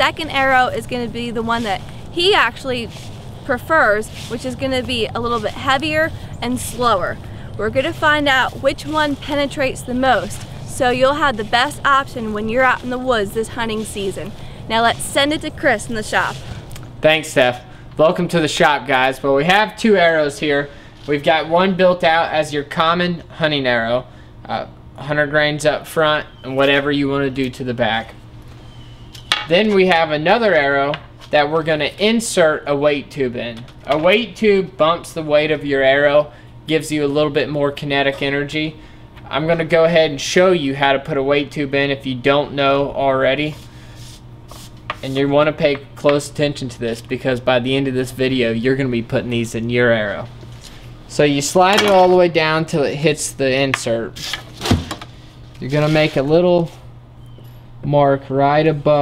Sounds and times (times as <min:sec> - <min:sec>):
Speech: 0:00.0 - 0:02.9, 0:03.5 - 0:16.4, 0:45.0 - 0:50.3, 0:51.1 - 0:54.2, 0:55.6 - 0:56.8, 0:57.8 - 0:59.0.